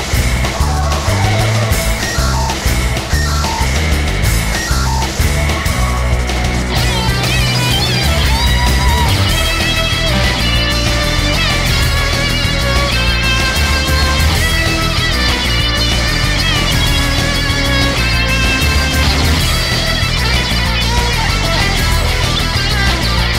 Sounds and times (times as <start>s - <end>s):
Music: 0.0s - 23.3s.